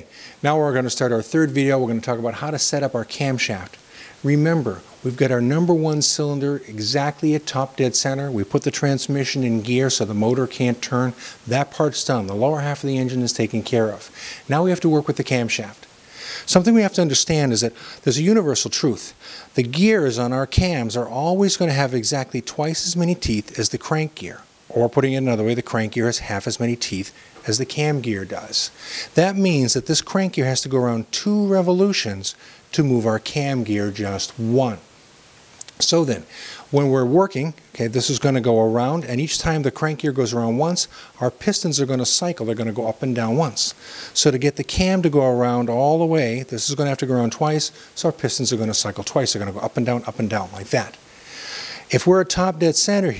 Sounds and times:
Speech: 0:00.0 - 0:15.9, 0:16.5 - 0:34.9, 0:35.7 - 0:51.0, 0:51.9 - 0:53.1.

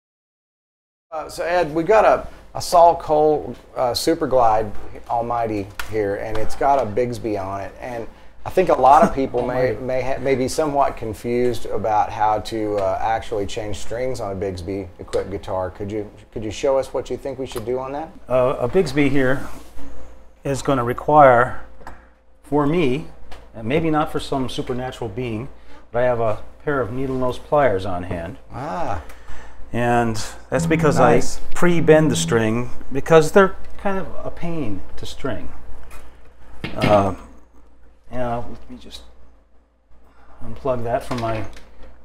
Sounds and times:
Speech: 0:01.2 - 0:19.6, 0:20.5 - 0:21.7, 0:22.5 - 0:29.1, 0:29.7 - 0:35.6, 0:36.7 - 0:37.4, 0:38.1 - 0:39.1, 0:40.4 - 0:41.6
Strum: 0:30.6 - 0:32.9.

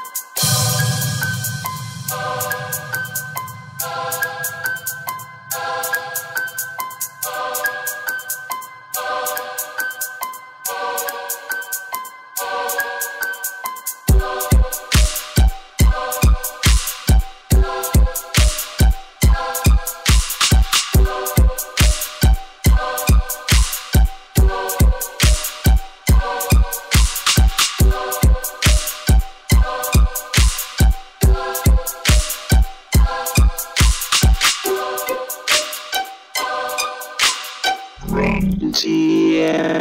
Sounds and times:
Music: 0:00.0 - 0:39.8.

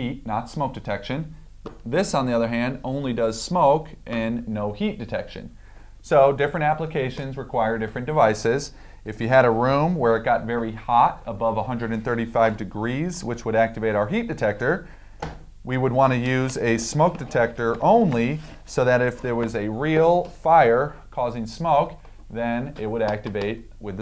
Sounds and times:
Speech: 0:00.0 - 0:14.9, 0:15.7 - 0:24.0.

